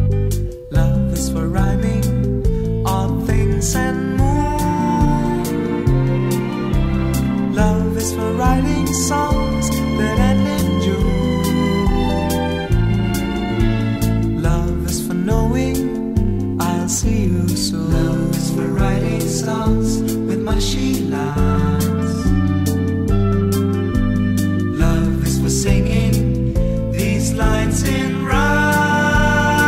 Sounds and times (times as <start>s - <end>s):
Music: 0.0s - 29.6s
Male singing: 0.7s - 2.2s, 2.9s - 5.6s, 7.5s - 11.8s, 14.4s - 16.0s, 16.6s - 22.3s, 24.8s - 26.3s, 26.9s - 29.6s.